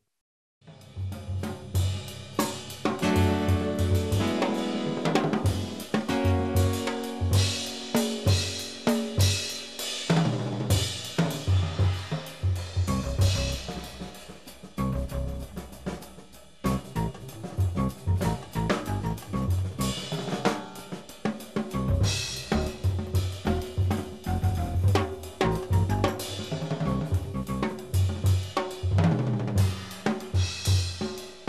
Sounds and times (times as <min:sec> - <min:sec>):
Drum kit: 0:00.6 - 0:31.4
Drum roll: 0:00.7 - 0:31.4
Bass drum: 0:01.0 - 0:09.4, 0:10.3 - 0:20.5, 0:21.6 - 0:31.1.